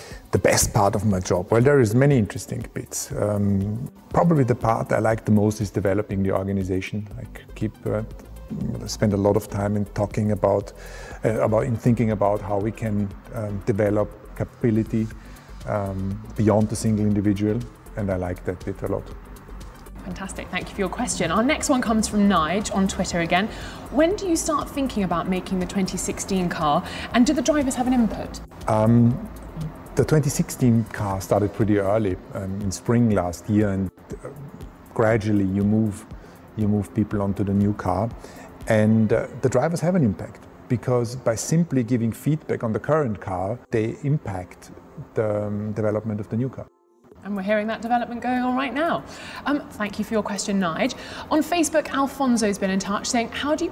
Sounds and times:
Music: 0:00.0 - 0:53.7.

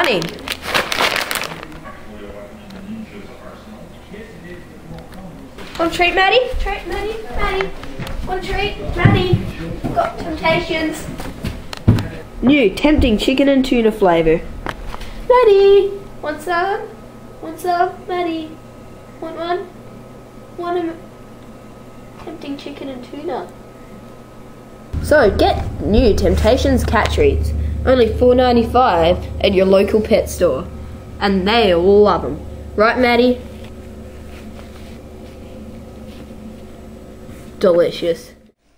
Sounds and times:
Speech: 0:01.5 - 0:11.2, 0:25.0 - 0:33.4, 0:37.6 - 0:38.4.

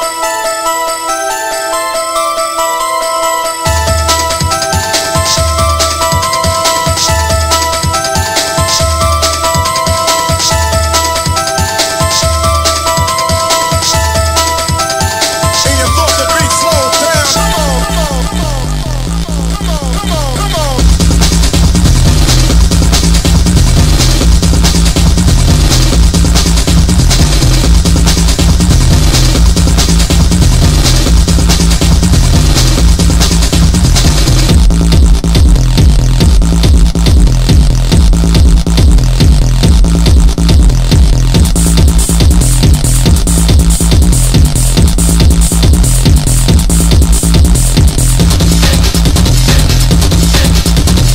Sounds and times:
Music: 0:00.0 - 0:51.1.

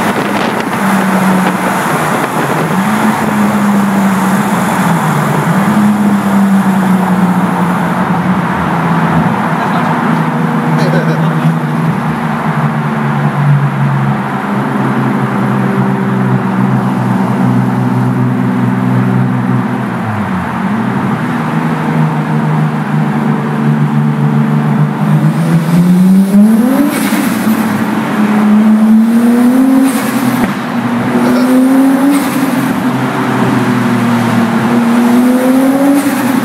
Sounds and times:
Speech: 0:10.8 - 0:11.6, 0:31.2 - 0:31.6.

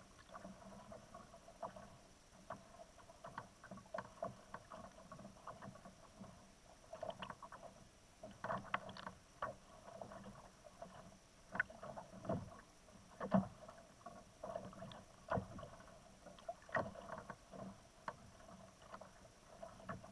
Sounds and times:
Rowboat, canoe, kayak: 0:00.0 - 0:20.1.

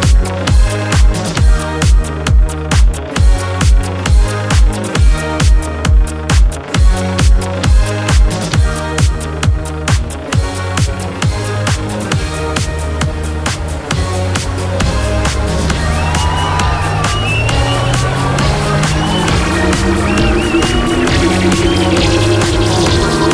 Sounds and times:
Dance music: 0:00.0 - 0:23.3.

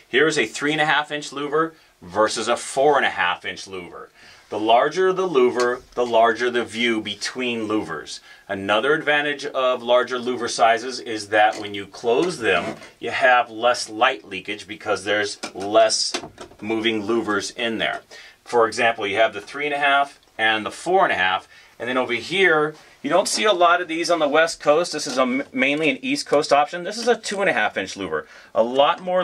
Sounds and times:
Speech: 0:00.0 - 0:29.2.

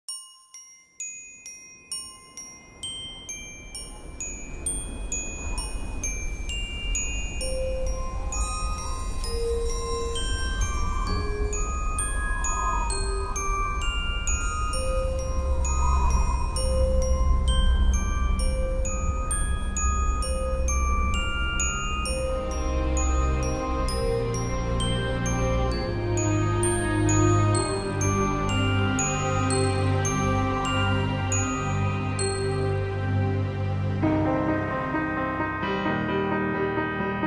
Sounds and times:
Music: 0:00.1 - 0:37.2.

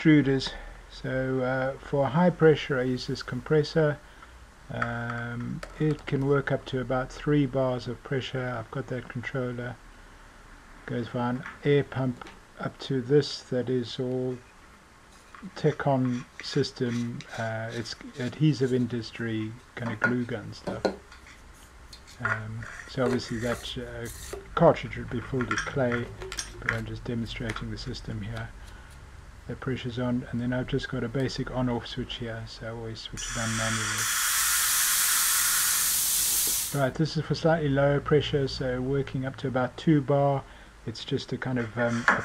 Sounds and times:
Speech: 0:00.0 - 0:04.0, 0:04.7 - 0:09.8, 0:10.9 - 0:14.4, 0:15.4 - 0:21.0, 0:22.2 - 0:28.6, 0:29.5 - 0:34.0, 0:36.8 - 0:42.2.

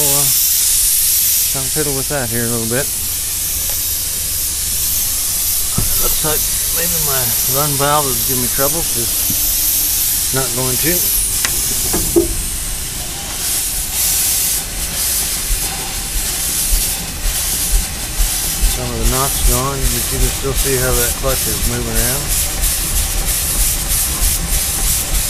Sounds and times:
Speech: 0:00.0 - 0:00.4, 0:01.5 - 0:03.0, 0:05.8 - 0:09.2, 0:10.3 - 0:11.1, 0:18.7 - 0:22.3
Hiss: 0:00.0 - 0:25.2.

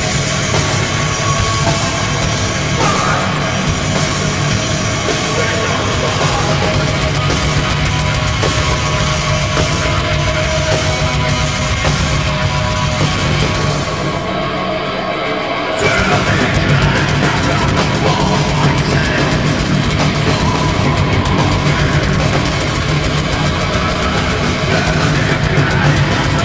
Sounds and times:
Music: 0:00.0 - 0:26.4.

